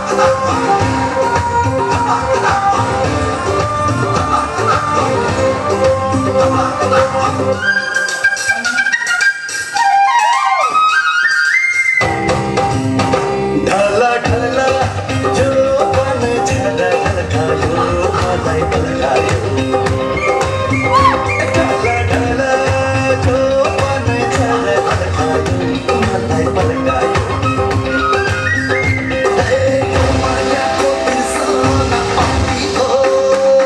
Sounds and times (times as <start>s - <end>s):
Flute: 0.0s - 12.6s, 19.7s - 25.0s, 25.8s - 33.6s.